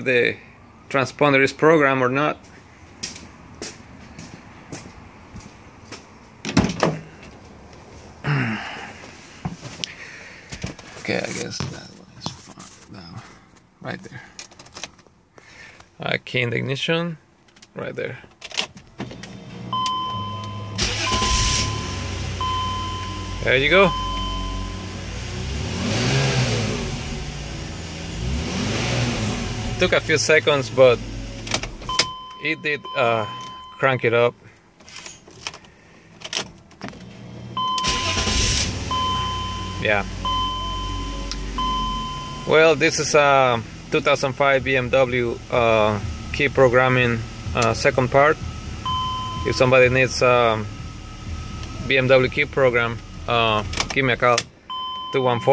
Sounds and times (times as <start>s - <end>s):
Speech: 0.0s - 2.4s, 11.0s - 13.2s, 16.0s - 17.2s, 17.8s - 18.2s, 23.4s - 23.9s, 29.8s - 31.0s, 32.4s - 34.4s, 39.8s - 40.1s, 42.5s - 48.4s, 49.5s - 50.7s, 51.8s - 54.4s, 55.1s - 55.5s
Car: 0.0s - 55.5s.